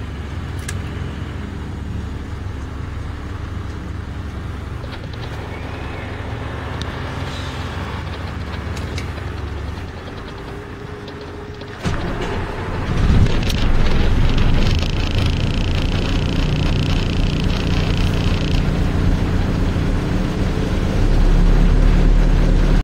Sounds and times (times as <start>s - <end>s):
Medium engine (mid frequency): 0.0s - 22.8s
Vehicle: 0.0s - 22.8s.